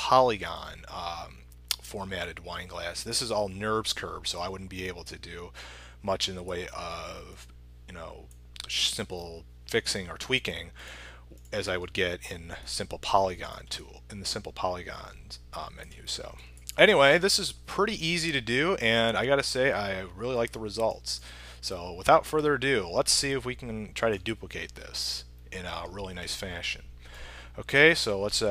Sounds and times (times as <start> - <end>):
Speech: 0.0 - 10.8, 11.5 - 26.9, 27.6 - 28.5.